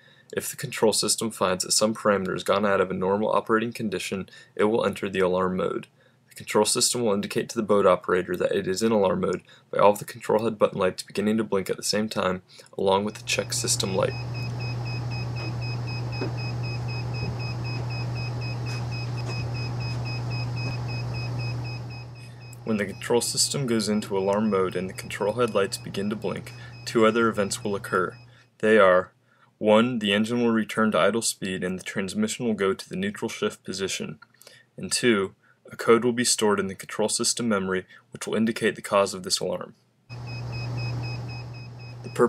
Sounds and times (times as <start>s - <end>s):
Speech: 0.3s - 14.2s, 22.7s - 34.2s, 34.8s - 39.8s.